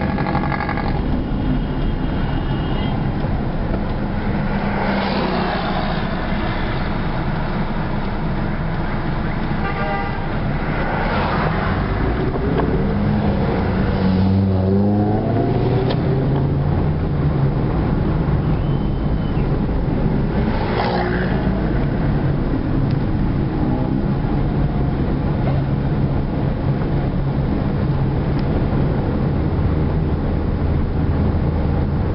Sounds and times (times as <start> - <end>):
Car: 0.0 - 32.1
Outside, urban or manmade: 0.0 - 32.1.